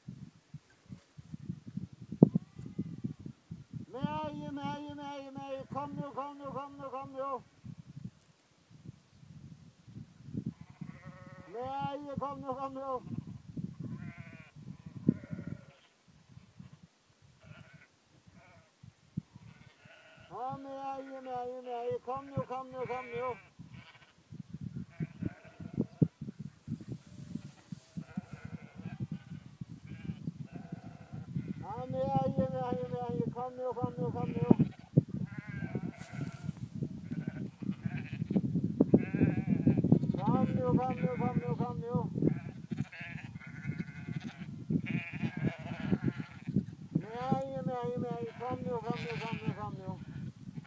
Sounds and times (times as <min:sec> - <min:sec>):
Bleat: 0:02.3 - 0:03.3, 0:03.9 - 0:07.5, 0:10.5 - 0:26.2, 0:27.2 - 0:50.6
Speech: 0:04.0 - 0:07.4, 0:11.6 - 0:13.1, 0:20.4 - 0:23.4, 0:31.6 - 0:34.6, 0:40.2 - 0:42.1, 0:47.0 - 0:50.1.